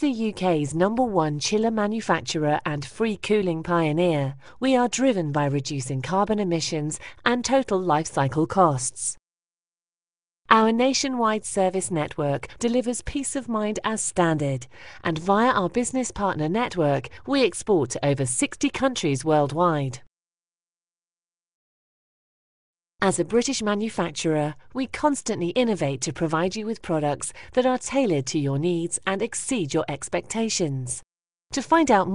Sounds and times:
Speech: 0.0s - 9.2s, 10.5s - 20.1s, 23.0s - 32.1s.

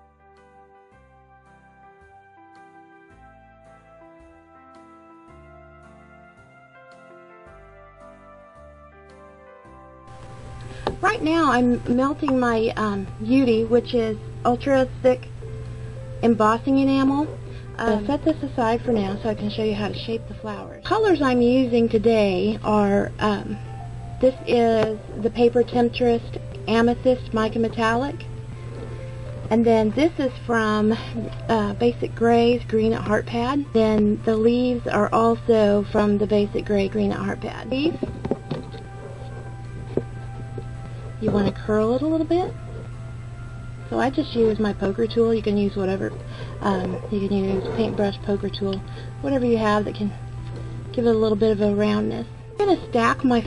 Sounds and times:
Music: 0.0s - 53.4s
Speech: 11.0s - 15.3s, 16.2s - 23.6s, 24.2s - 28.2s, 29.5s - 38.0s, 41.2s - 42.6s, 43.9s - 50.2s, 51.0s - 53.4s.

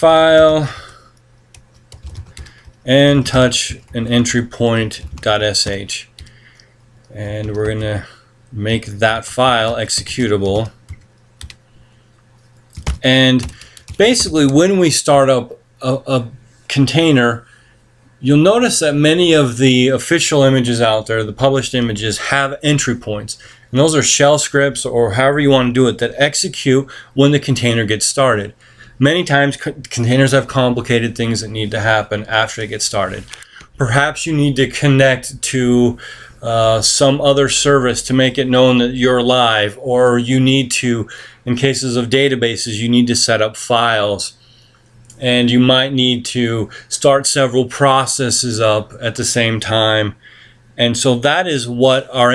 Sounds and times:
Speech: 0.0s - 1.0s, 2.8s - 6.2s, 7.1s - 10.8s, 13.0s - 17.5s, 18.2s - 44.4s, 45.1s - 50.2s, 50.8s - 52.3s.

